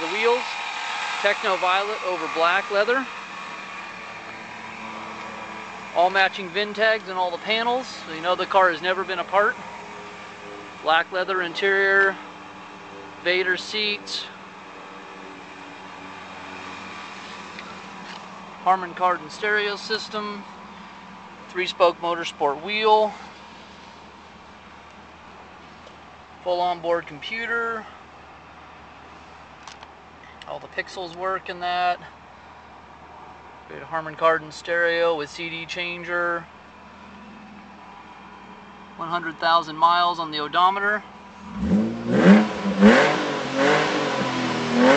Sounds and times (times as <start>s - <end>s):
Speech: 0.0s - 0.5s, 1.2s - 3.1s, 6.0s - 9.6s, 10.8s - 12.2s, 13.2s - 14.4s, 18.6s - 20.5s, 21.5s - 23.2s, 26.4s - 27.9s, 30.4s - 32.1s, 33.7s - 36.5s, 39.0s - 41.1s.